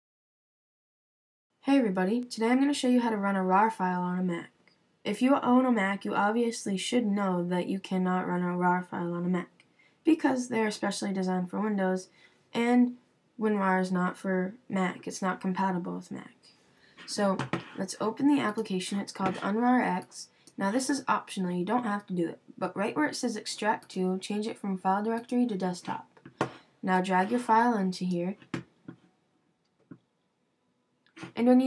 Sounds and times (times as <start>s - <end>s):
Speech: 1.6s - 4.5s, 5.1s - 16.4s, 17.0s - 28.6s, 31.2s - 31.6s.